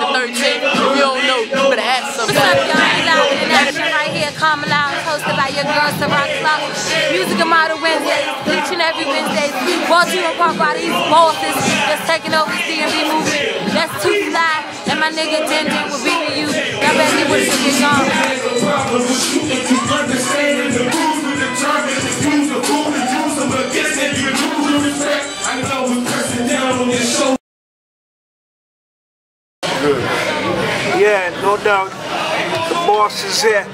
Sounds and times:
Disco: 0.0 - 27.4.

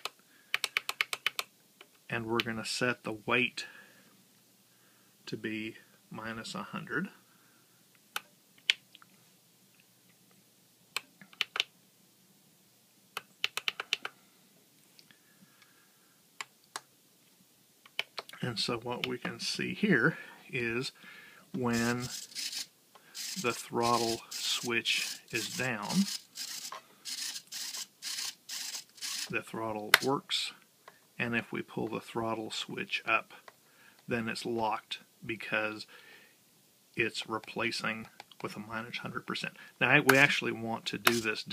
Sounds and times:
Inside, small room: 0.0 - 41.5
Speech: 2.1 - 3.7, 5.3 - 7.2, 18.4 - 21.0, 21.6 - 22.1, 23.4 - 26.1, 29.3 - 30.6, 31.2 - 33.4, 34.1 - 35.9, 37.0 - 41.5.

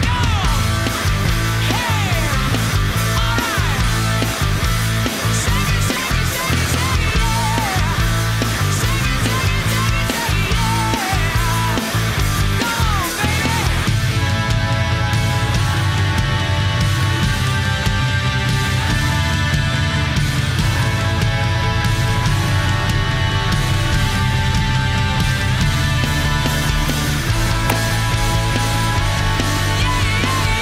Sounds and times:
Music: 0.0 - 30.6.

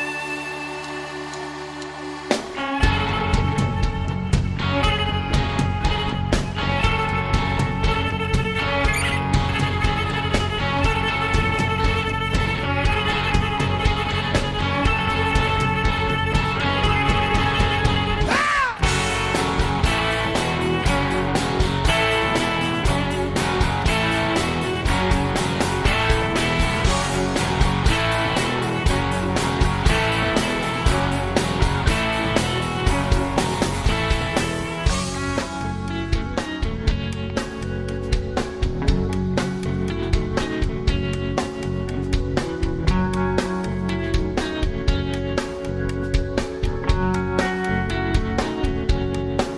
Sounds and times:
Music: 0.0 - 49.5.

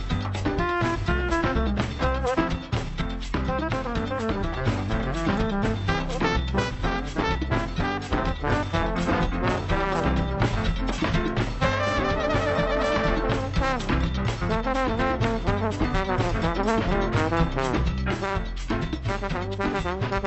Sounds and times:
Music: 0.0 - 20.2.

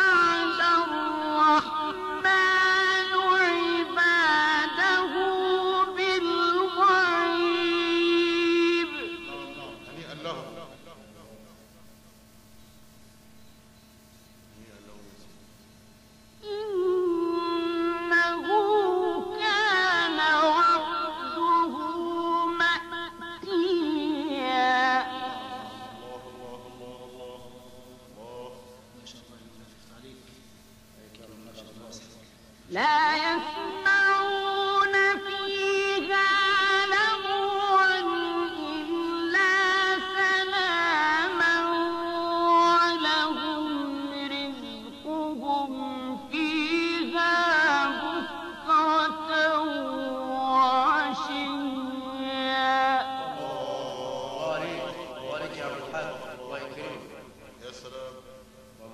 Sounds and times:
Chant: 0.0 - 11.8, 16.2 - 58.9.

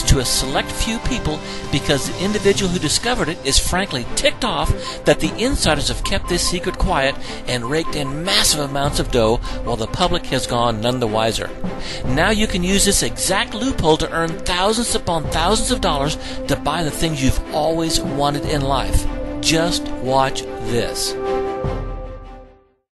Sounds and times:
Speech: 0.0 - 21.2
Music: 0.0 - 22.9.

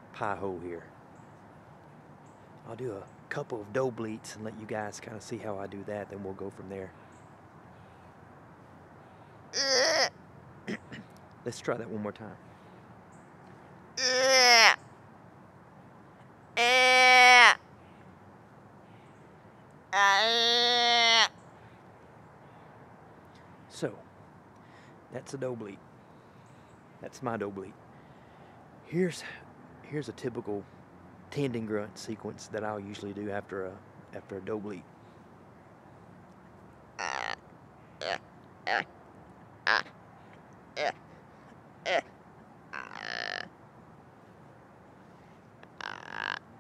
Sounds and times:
Speech: 0.1 - 0.9, 2.7 - 7.0, 11.5 - 12.4, 23.7 - 24.1, 25.2 - 25.8, 27.0 - 27.8, 28.9 - 30.7, 31.3 - 34.8.

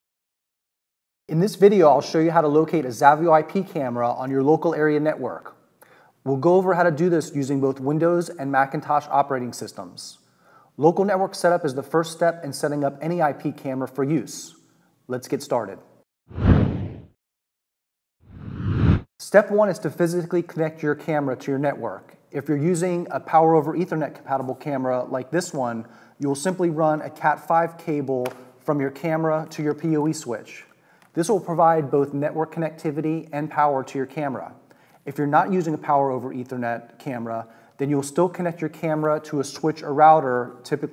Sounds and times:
Speech: 1.3 - 5.6, 6.2 - 10.2, 10.8 - 15.9, 19.2 - 40.9.

